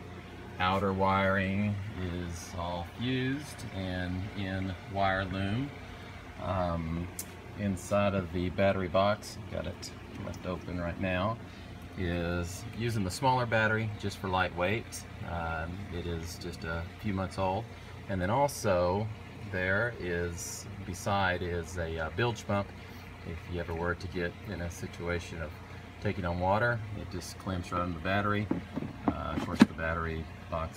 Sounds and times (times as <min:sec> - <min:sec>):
Speech: 0:00.6 - 0:05.8, 0:06.4 - 0:30.7.